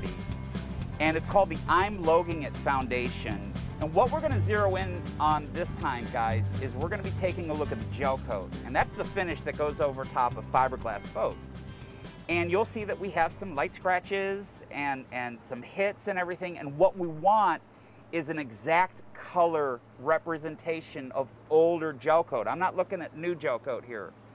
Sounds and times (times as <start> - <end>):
Music: 0.0 - 15.4
Speech: 1.0 - 11.5, 12.3 - 24.2.